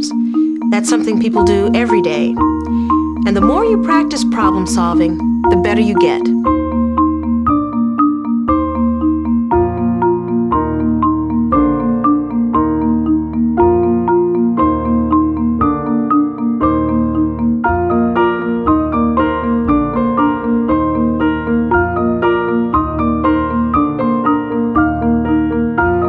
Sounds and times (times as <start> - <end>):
Glockenspiel: 0.0 - 26.0
Speech: 0.8 - 2.4, 3.3 - 6.3.